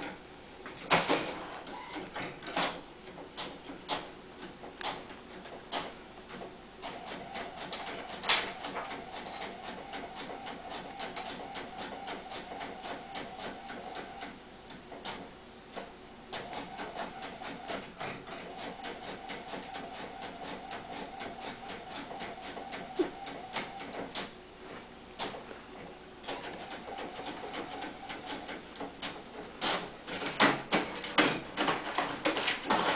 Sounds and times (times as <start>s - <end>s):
Printer: 0.0s - 24.4s, 25.1s - 32.9s.